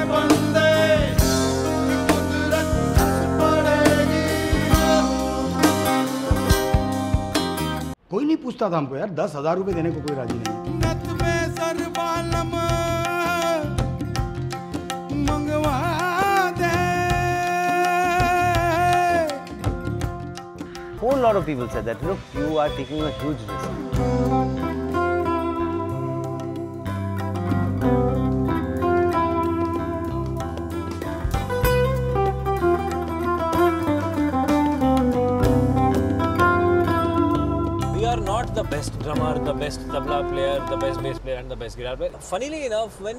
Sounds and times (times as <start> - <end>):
Tender music: 0.0 - 8.0, 9.7 - 41.4
Speech: 8.1 - 10.5, 21.0 - 23.8, 38.0 - 43.1.